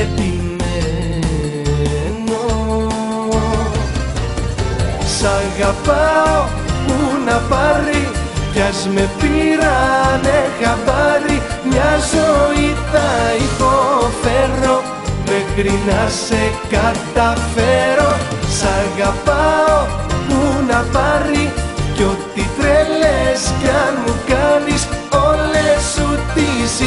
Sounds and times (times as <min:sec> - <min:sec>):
Music: 0:00.0 - 0:26.8.